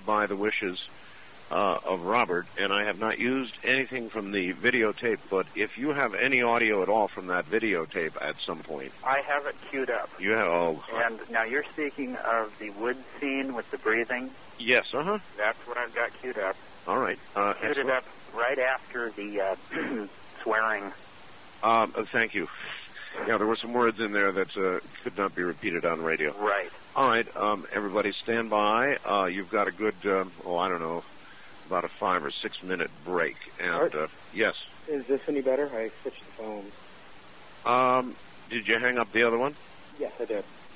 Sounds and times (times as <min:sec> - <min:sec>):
Speech: 0:00.0 - 0:00.9, 0:01.5 - 0:21.0, 0:21.6 - 0:31.0, 0:31.7 - 0:36.7, 0:37.6 - 0:40.5.